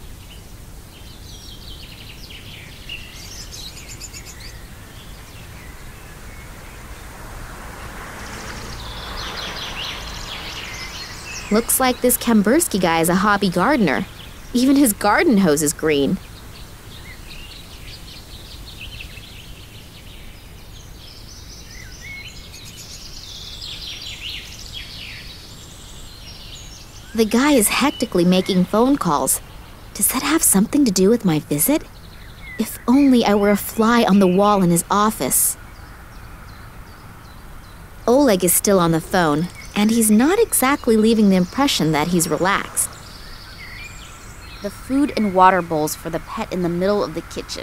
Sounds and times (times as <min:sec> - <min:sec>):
Outside, rural or natural: 0:00.0 - 0:47.6
Speech: 0:11.5 - 0:16.2, 0:27.2 - 0:29.4, 0:30.0 - 0:31.9, 0:32.6 - 0:35.6, 0:38.1 - 0:42.9, 0:44.7 - 0:47.6.